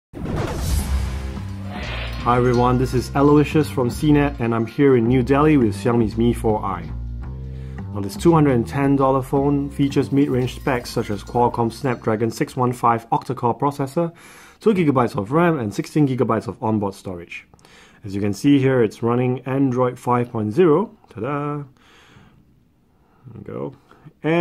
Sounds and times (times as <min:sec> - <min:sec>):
Speech: 0:02.2 - 0:07.0, 0:07.9 - 0:21.8, 0:23.2 - 0:24.4.